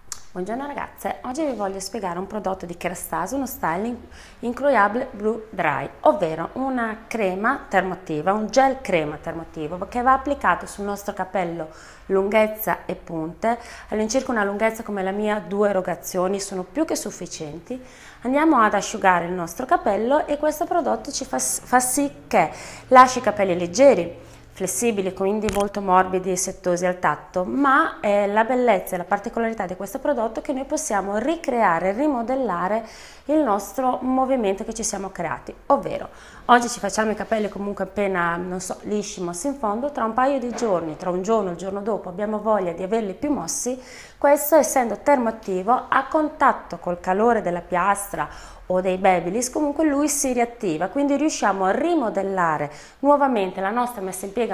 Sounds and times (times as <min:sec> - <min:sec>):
Speech: 0:00.2 - 0:54.5.